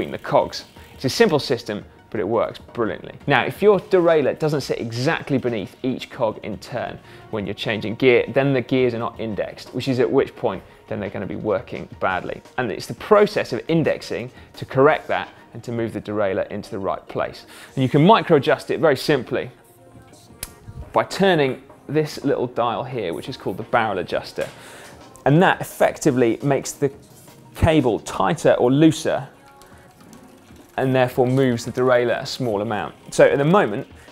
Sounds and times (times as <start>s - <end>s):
Speech: 0.0s - 19.6s, 20.9s - 24.5s, 25.3s - 27.0s, 27.6s - 29.3s, 30.8s - 33.9s
Music: 0.0s - 34.1s.